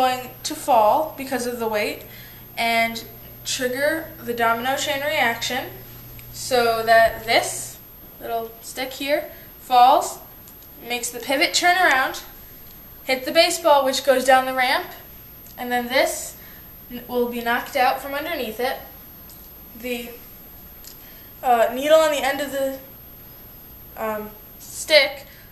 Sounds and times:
Speech: 0.0s - 5.8s, 6.4s - 12.3s, 13.1s - 15.0s, 15.6s - 18.9s, 19.8s - 20.2s, 21.4s - 22.9s, 24.0s - 25.3s.

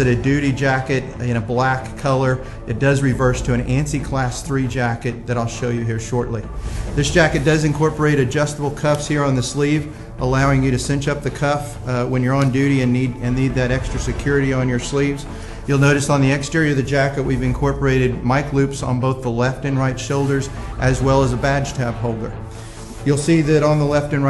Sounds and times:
Speech: 0.0s - 22.4s, 23.0s - 24.2s
Music: 0.0s - 24.2s.

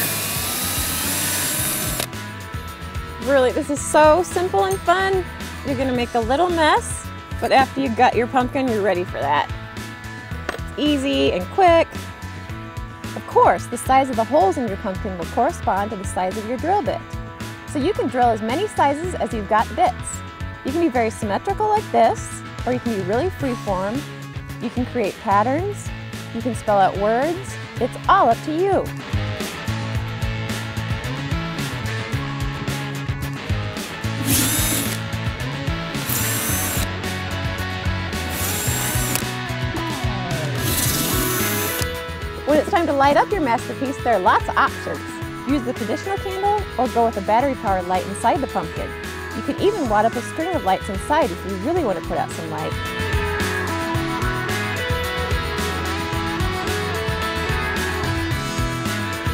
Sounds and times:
Music: 0.0s - 59.3s
Speech: 3.2s - 9.5s, 10.8s - 11.9s, 13.2s - 17.0s, 17.7s - 24.0s, 24.6s - 28.9s, 42.5s - 52.8s.

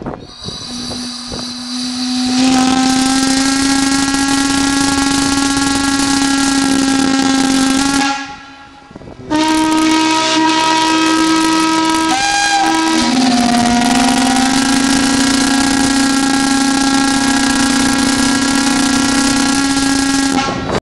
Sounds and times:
Steam whistle: 0.2s - 20.8s.

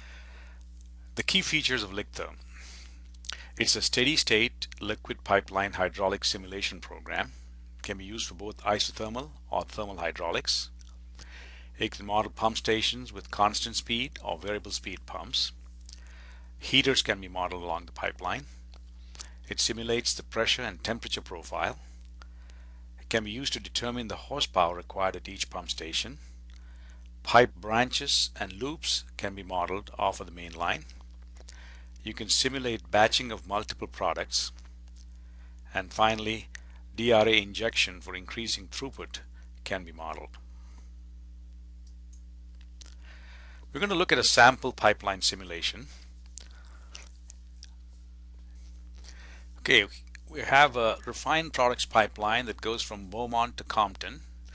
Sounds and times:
Speech: 1.2s - 2.4s, 3.3s - 10.8s, 11.8s - 15.6s, 16.6s - 18.6s, 19.4s - 21.9s, 23.0s - 26.2s, 27.2s - 31.0s, 32.0s - 34.6s, 35.7s - 40.4s, 43.7s - 46.0s, 49.6s - 54.3s.

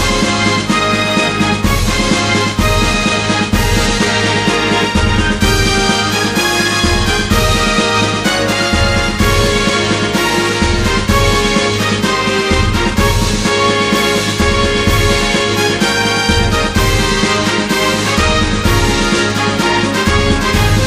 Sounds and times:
Music: 0.0s - 20.8s.

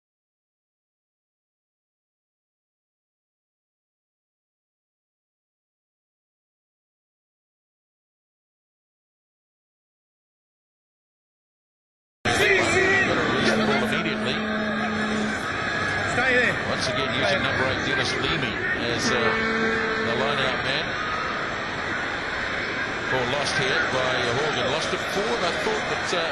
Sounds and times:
Speech: 12.3s - 15.3s, 16.1s - 19.4s, 20.0s - 20.9s, 23.1s - 26.3s.

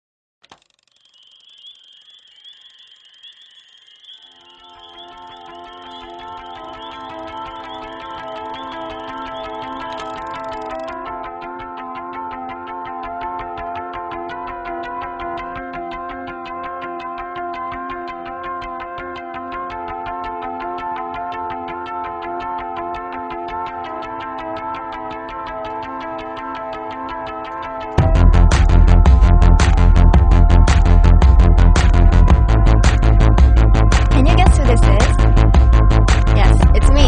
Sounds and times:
Music: 1.0s - 37.0s.

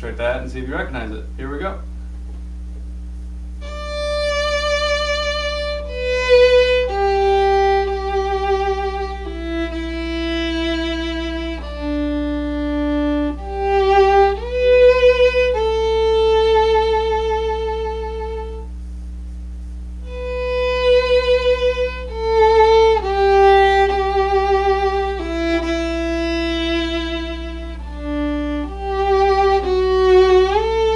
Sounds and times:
Music: 3.6s - 18.8s, 20.0s - 30.9s.

